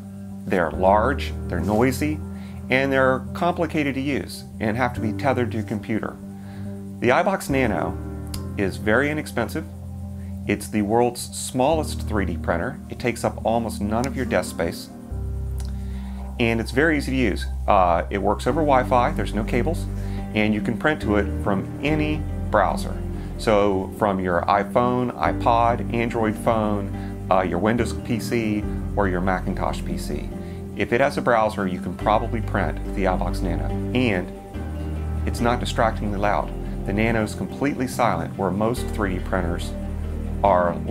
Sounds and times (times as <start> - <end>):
Music: 0.0 - 40.9
Speech: 0.5 - 6.2, 7.0 - 8.0, 8.6 - 9.7, 10.5 - 14.9, 16.4 - 34.3, 35.2 - 39.8, 40.4 - 40.9.